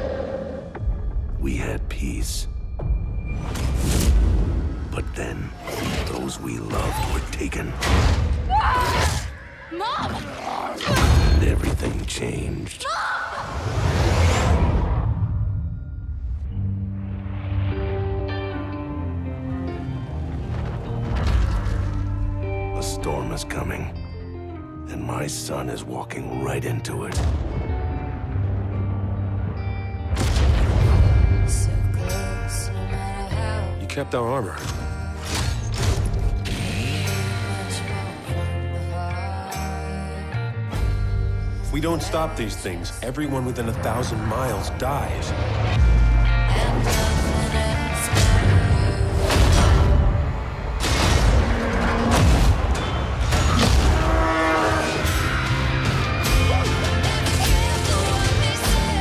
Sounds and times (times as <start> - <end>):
Music: 0.0 - 13.0, 13.7 - 59.0.